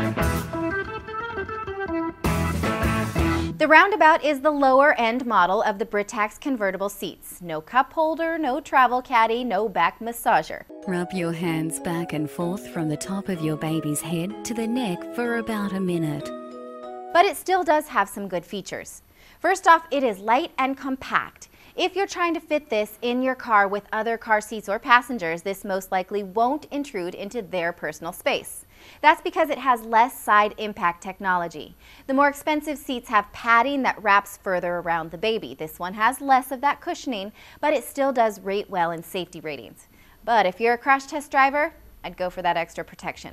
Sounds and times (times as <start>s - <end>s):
Speech: 3.6s - 16.3s, 17.2s - 43.3s.